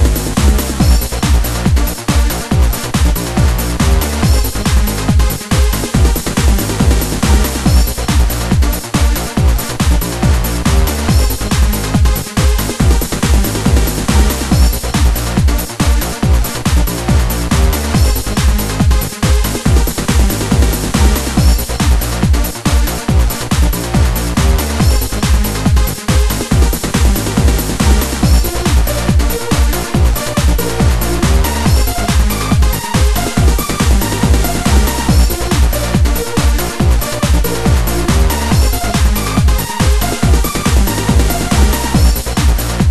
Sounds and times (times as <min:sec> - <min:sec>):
Techno: 0:00.0 - 0:42.9.